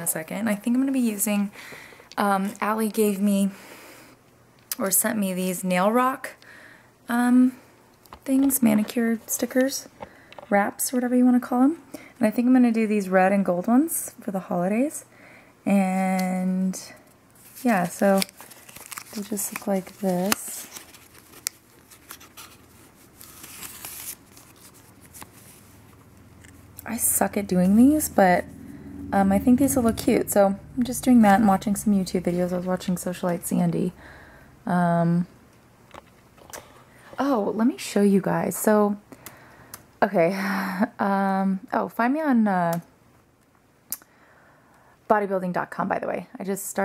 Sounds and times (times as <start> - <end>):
Speech: 0.0 - 1.5, 4.8 - 6.4, 8.3 - 9.9, 10.5 - 15.0, 26.9 - 28.4, 29.2 - 34.0, 37.2 - 39.0, 41.0 - 42.9, 45.1 - 46.8
Crumpling, crinkling: 17.4 - 26.0.